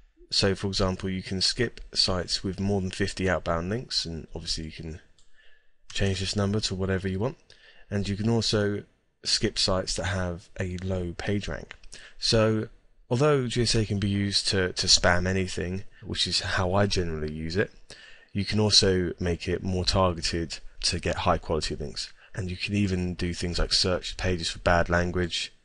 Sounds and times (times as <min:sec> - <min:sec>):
Speech: 0:00.2 - 0:05.1, 0:05.9 - 0:25.6.